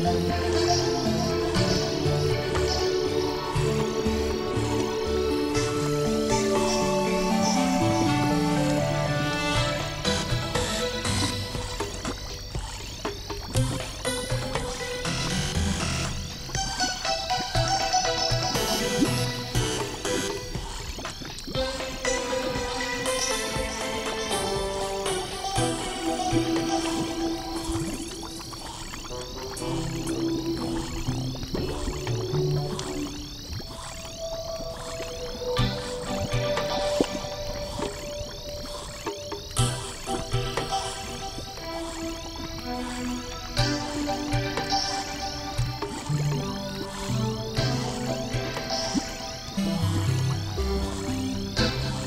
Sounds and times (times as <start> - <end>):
Music: 0.0 - 52.0.